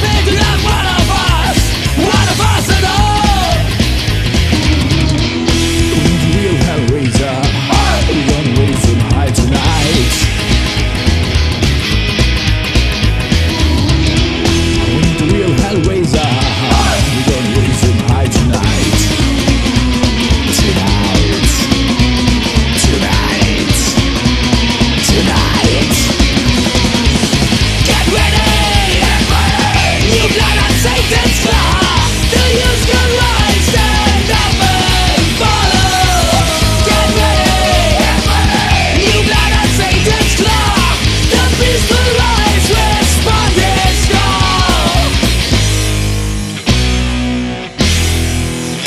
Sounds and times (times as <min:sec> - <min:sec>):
Punk rock: 0:00.0 - 0:48.8.